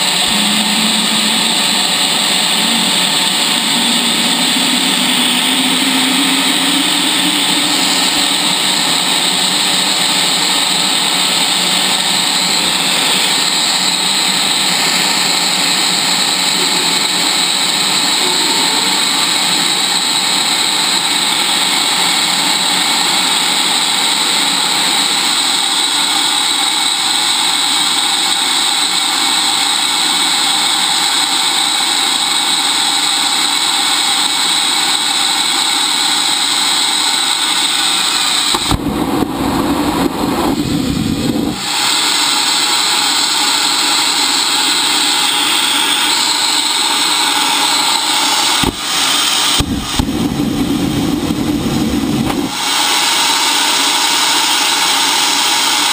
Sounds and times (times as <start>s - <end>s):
Engine: 0.0s - 55.9s.